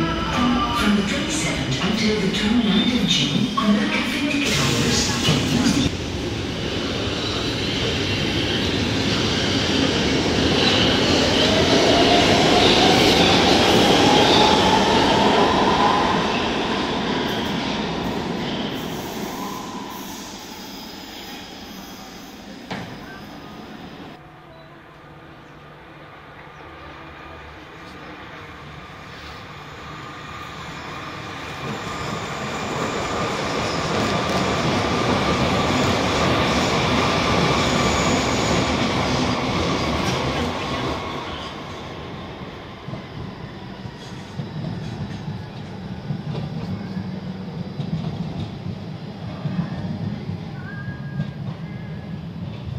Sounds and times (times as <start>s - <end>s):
Train: 0.0s - 52.7s.